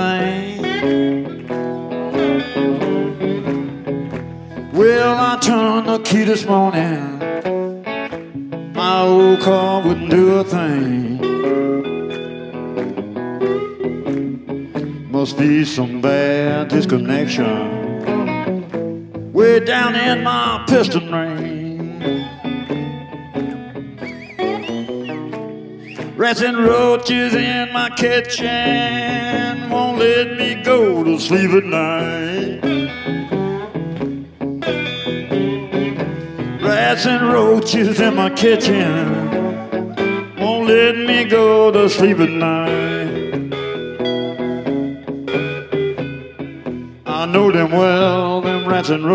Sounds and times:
Music: 0:00.0 - 0:49.1.

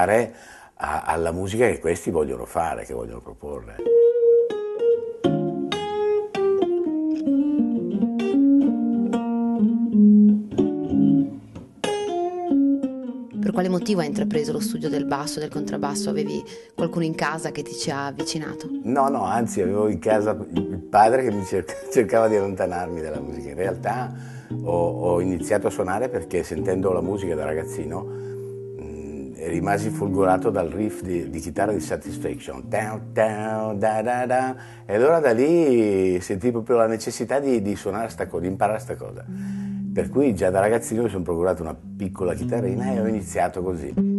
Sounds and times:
Speech: 0:00.0 - 0:03.8, 0:13.4 - 0:24.1, 0:24.7 - 0:28.0, 0:28.8 - 0:39.3, 0:40.0 - 0:44.0
Bass guitar: 0:05.3 - 0:16.3, 0:37.6 - 0:44.1.

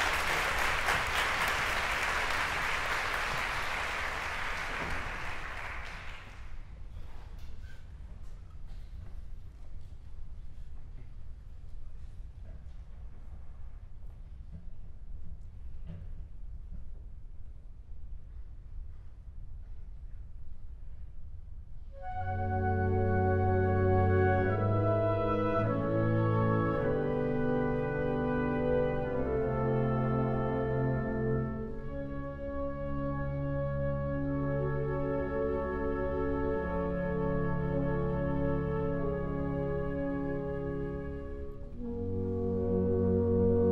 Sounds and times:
Music: 0:21.8 - 0:43.7.

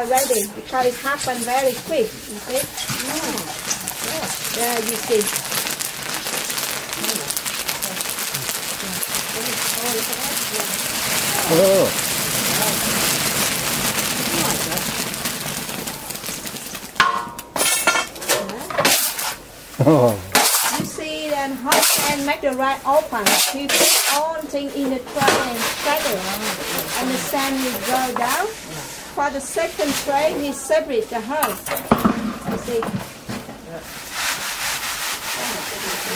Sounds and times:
Speech: 0:19.8 - 0:20.3.

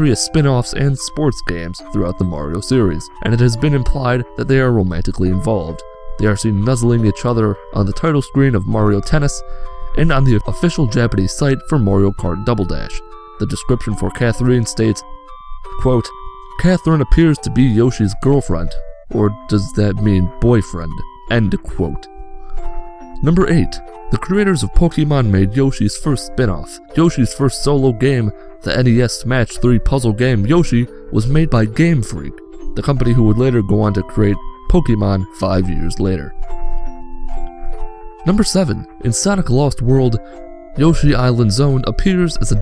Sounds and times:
Speech: 0:00.0 - 0:15.0, 0:15.8 - 0:22.1, 0:23.2 - 0:36.4, 0:38.2 - 0:40.2, 0:40.8 - 0:42.6
Music: 0:00.0 - 0:42.6.

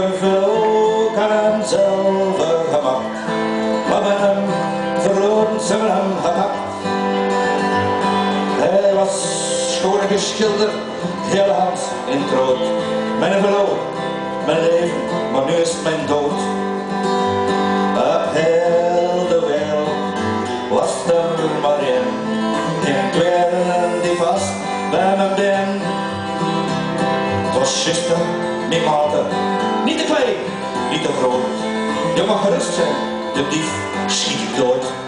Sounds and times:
Music: 0:00.0 - 0:35.0.

